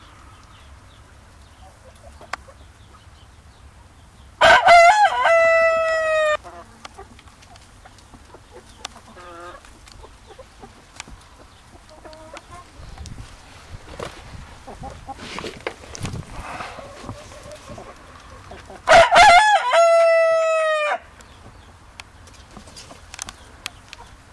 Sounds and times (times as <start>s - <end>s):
Chicken, rooster: 4.4s - 13.0s, 16.4s - 21.1s.